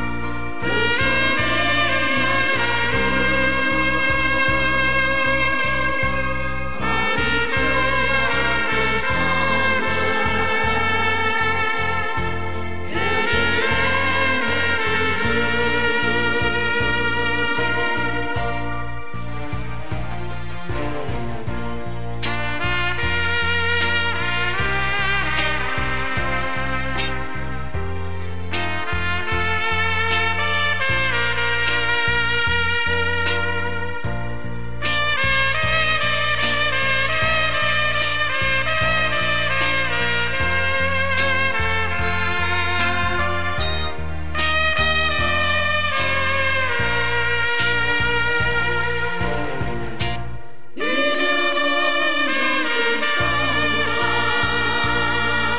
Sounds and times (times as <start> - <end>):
Music: 0.0 - 55.5.